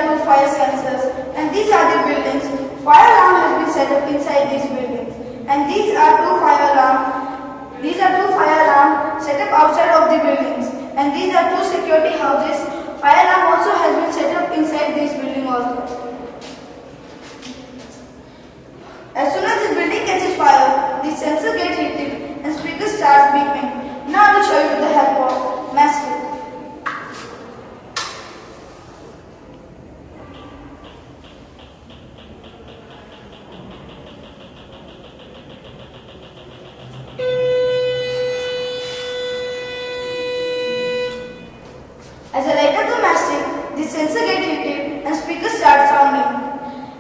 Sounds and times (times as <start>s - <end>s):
Speech: 0.0s - 16.4s, 19.2s - 26.4s, 42.3s - 46.7s.